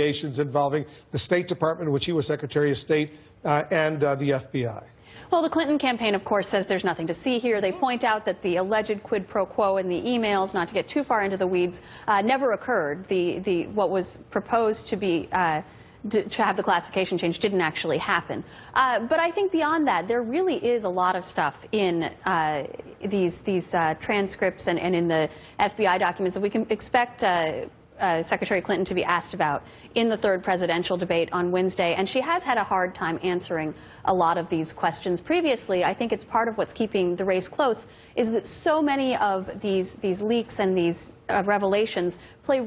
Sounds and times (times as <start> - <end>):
Narration, monologue: 0.0 - 42.6
Female speech, woman speaking: 5.3 - 42.6.